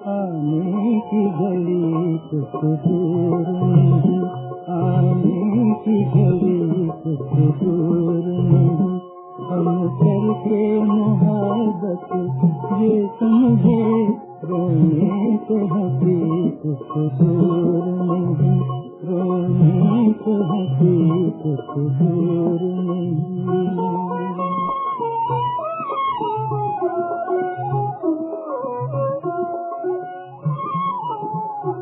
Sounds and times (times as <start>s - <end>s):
Violin, fiddle: 0.0s - 31.8s.